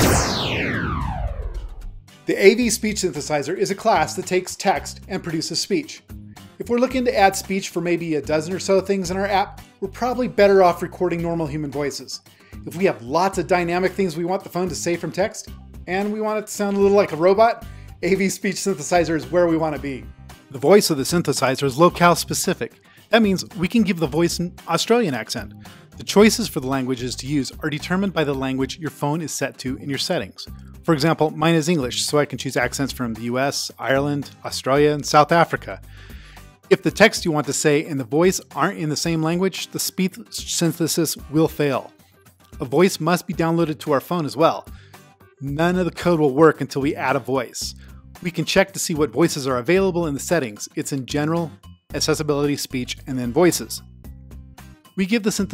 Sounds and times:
Music: 0:00.0 - 0:55.5
Speech: 0:02.3 - 0:06.0, 0:06.6 - 0:35.8, 0:36.7 - 0:41.9, 0:42.6 - 0:44.7, 0:45.4 - 0:53.8, 0:55.0 - 0:55.5.

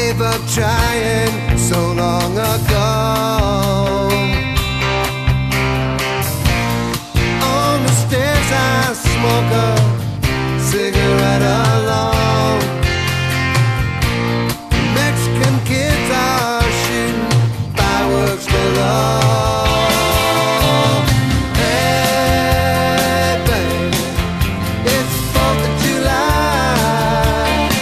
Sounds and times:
Psychedelic rock: 0:00.0 - 0:27.8.

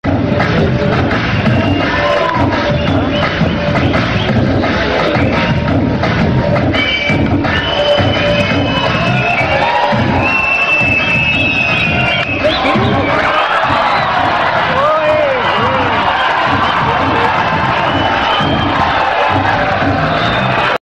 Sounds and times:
Music: 0:00.0 - 0:20.8.

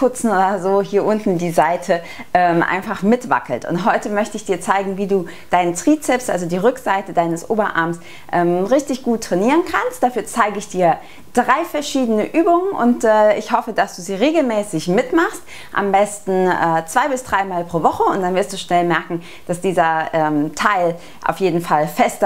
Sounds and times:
Speech: 0:00.0 - 0:22.2.

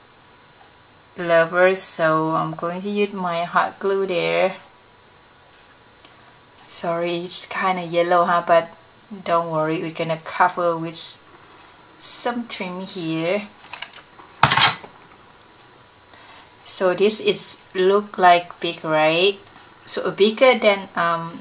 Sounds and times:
Inside, small room: 0:00.0 - 0:21.4
Speech: 0:01.2 - 0:04.6, 0:06.7 - 0:11.3, 0:12.0 - 0:13.6, 0:16.6 - 0:21.4.

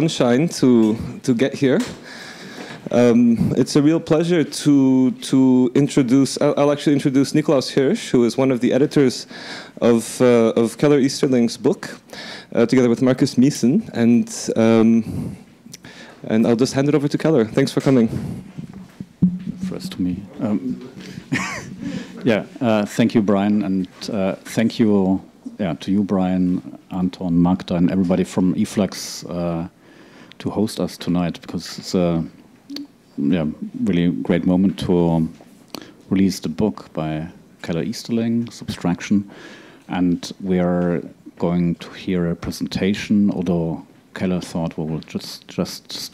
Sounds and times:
Conversation: 0:00.0 - 0:45.8.

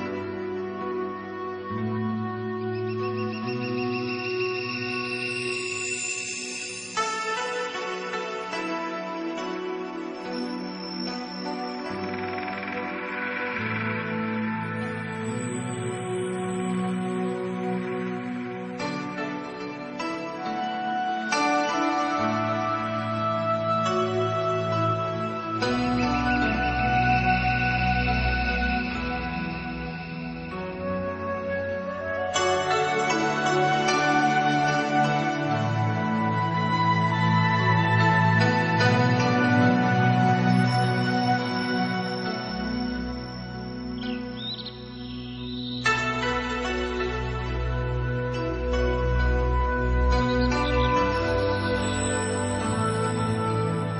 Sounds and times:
Music: 0:00.0 - 0:53.9.

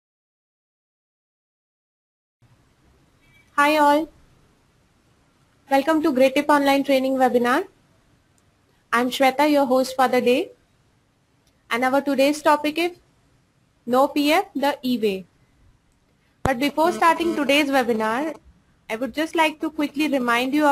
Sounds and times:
Inside, small room: 0:02.4 - 0:20.7
Speech: 0:03.6 - 0:04.1, 0:05.7 - 0:07.7, 0:08.9 - 0:10.6, 0:11.7 - 0:13.0, 0:13.9 - 0:15.3, 0:16.5 - 0:20.7.

